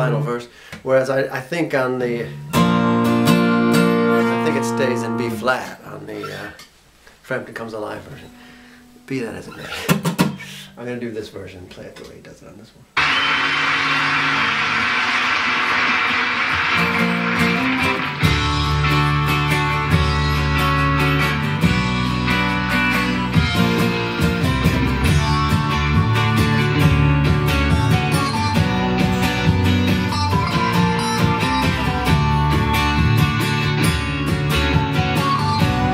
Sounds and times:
Acoustic guitar: 0:02.0 - 0:07.2, 0:08.0 - 0:10.8, 0:14.2 - 0:35.9.

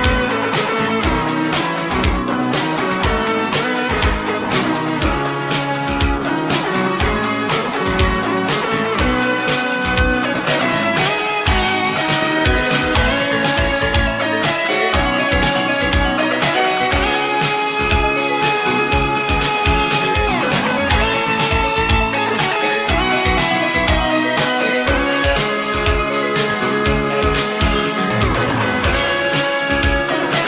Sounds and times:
Music: 0:00.0 - 0:30.4.

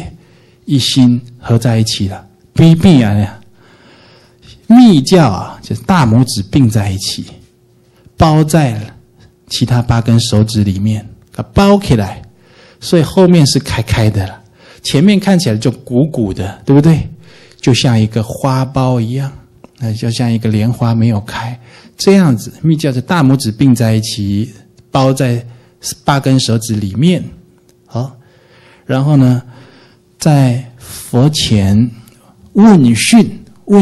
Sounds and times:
Speech: 0:00.0 - 0:03.4, 0:04.4 - 0:07.5, 0:08.2 - 0:28.2, 0:28.9 - 0:29.5, 0:30.2 - 0:33.8.

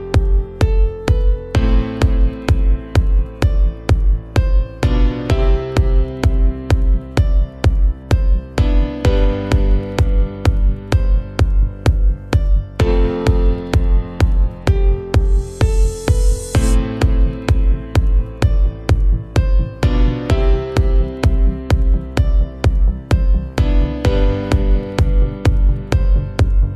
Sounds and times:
Soundtrack music: 0:00.0 - 0:26.7.

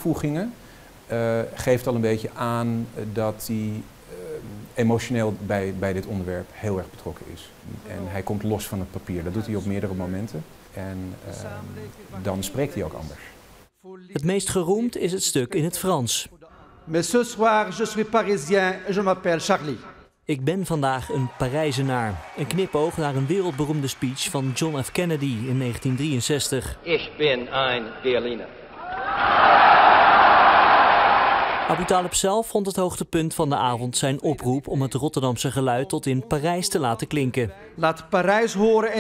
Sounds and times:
Male speech, man speaking: 0:00.0 - 0:28.5, 0:31.7 - 0:39.0
Narration, monologue: 0:00.0 - 0:28.7, 0:31.7 - 0:39.0.

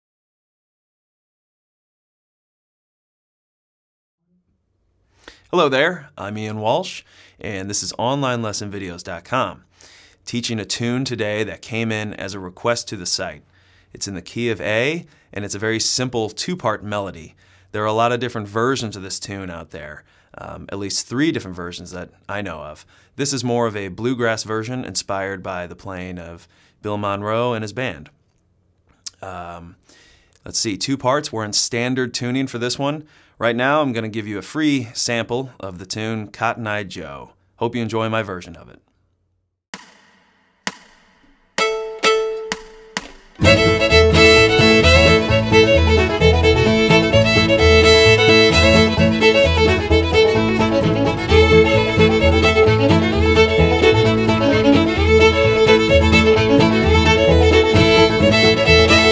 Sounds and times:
Speech: 0:05.5 - 0:09.6, 0:10.3 - 0:13.4, 0:14.0 - 0:28.2, 0:29.1 - 0:29.8, 0:30.4 - 0:38.9.

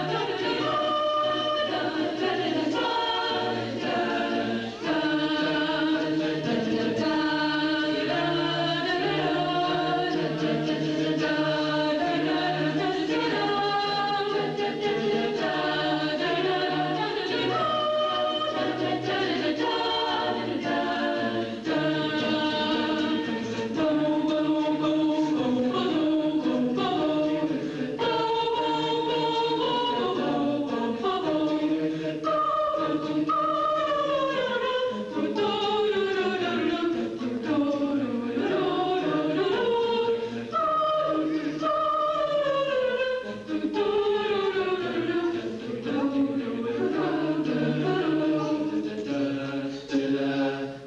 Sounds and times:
A capella: 0:00.0 - 0:50.8
Chant: 0:00.0 - 0:50.8
Choir: 0:00.0 - 0:50.8.

